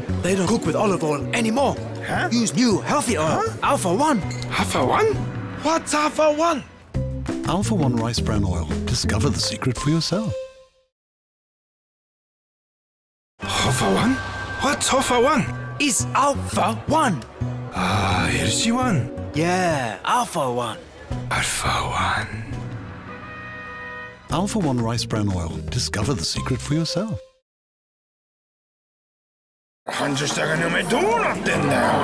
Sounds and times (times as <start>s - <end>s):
Music: 0.0s - 11.0s, 13.4s - 27.4s
Speech: 7.4s - 10.4s, 13.5s - 17.2s, 17.8s - 22.5s, 24.3s - 27.2s, 29.9s - 32.0s.